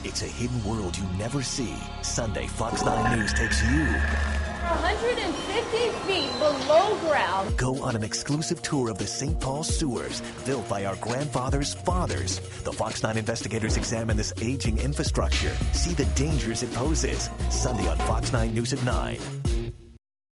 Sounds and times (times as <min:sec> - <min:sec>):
Speech: 0:00.0 - 0:19.2
Music: 0:00.0 - 0:20.0.